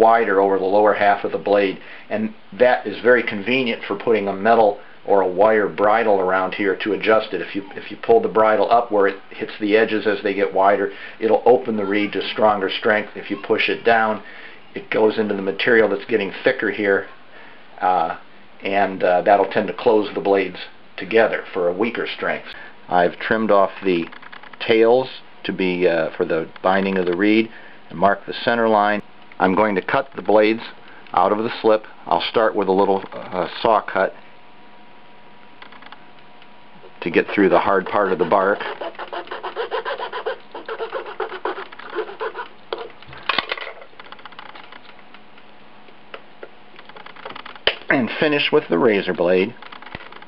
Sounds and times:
Speech: 0.0s - 17.2s, 17.8s - 34.2s, 37.0s - 38.7s, 47.9s - 49.6s.

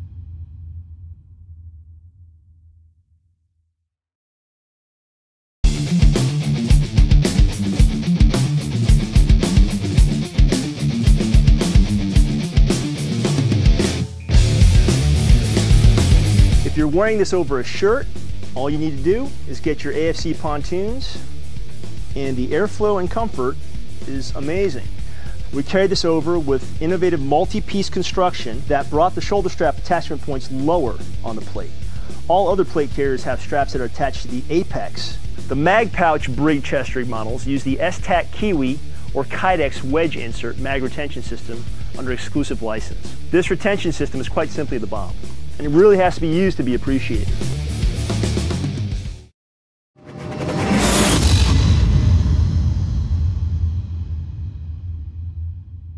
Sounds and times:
Music: 5.6s - 49.3s, 50.0s - 55.9s
Speech: 16.6s - 21.3s, 22.1s - 24.9s, 25.5s - 31.7s, 32.3s - 47.4s.

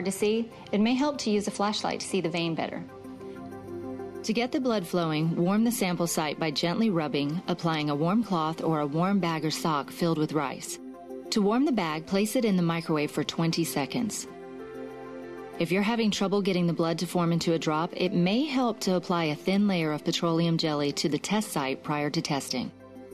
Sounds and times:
Speech: 0.0s - 2.9s, 4.3s - 14.3s, 15.6s - 22.7s
Music: 0.0s - 23.1s.

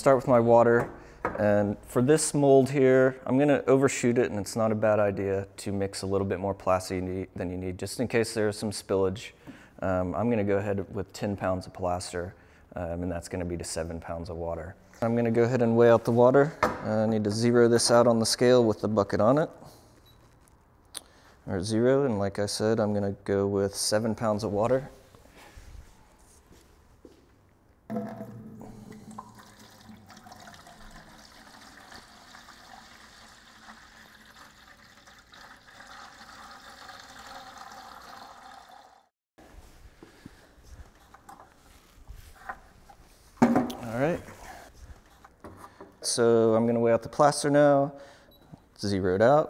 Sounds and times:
Pour: 27.9s - 39.1s.

